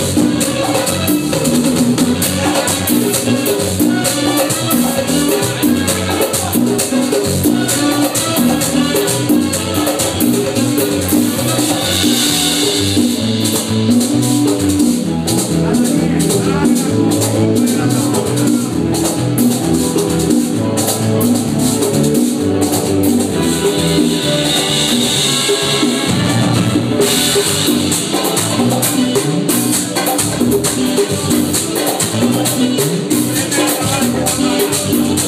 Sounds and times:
Hubbub, speech noise, speech babble: 0.0s - 25.1s, 26.8s - 35.2s
Music: 0.0s - 35.2s.

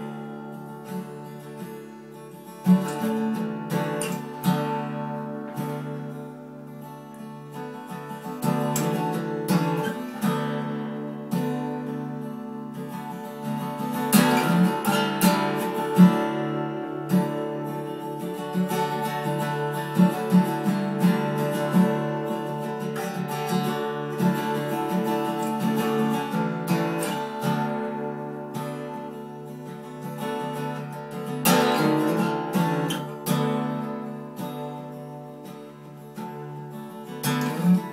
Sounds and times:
Music: 0.0s - 37.9s.

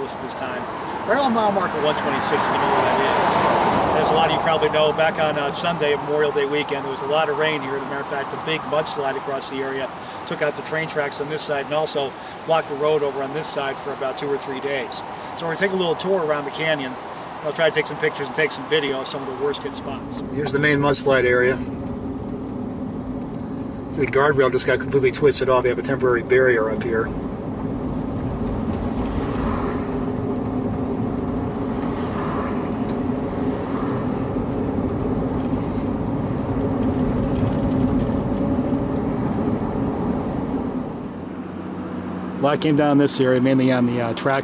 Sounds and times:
Speech: 0.0s - 21.7s, 23.9s - 27.1s, 42.4s - 44.4s.

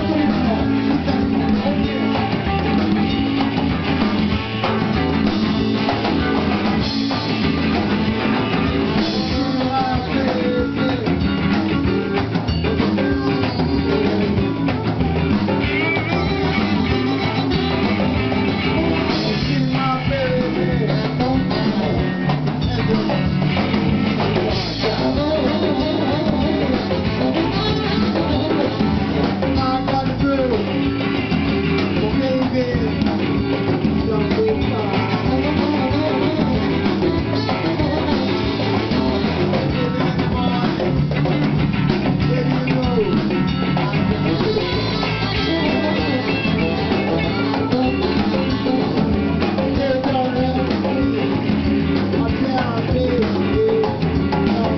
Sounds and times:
Percussion: 0.0s - 54.7s.

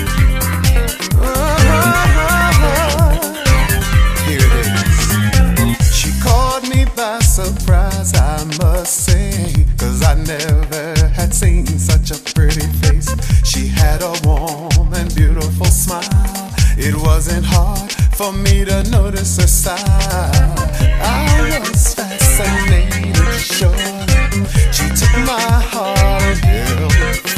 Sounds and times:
Music: 0.0s - 27.3s.

